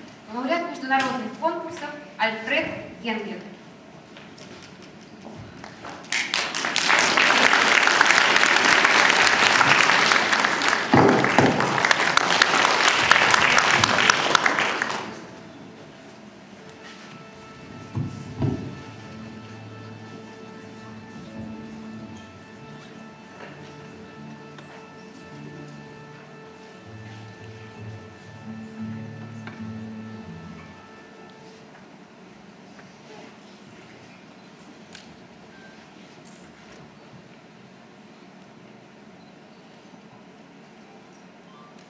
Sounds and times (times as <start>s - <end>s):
Orchestra: 6.1s - 33.4s
Strum: 16.7s - 31.6s.